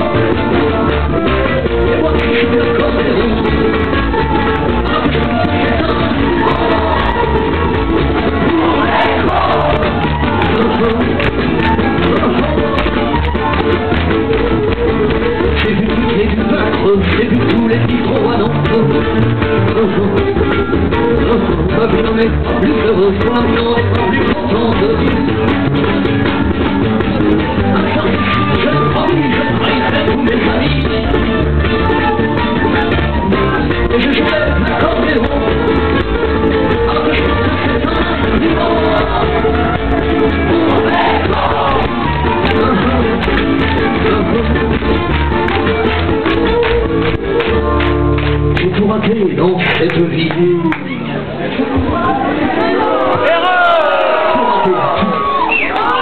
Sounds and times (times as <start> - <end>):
Music: 0.0 - 56.0.